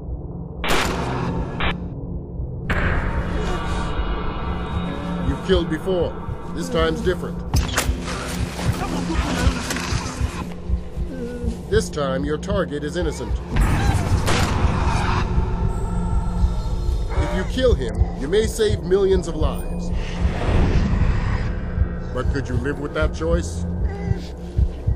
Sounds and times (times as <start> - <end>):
Music: 0.0 - 24.9.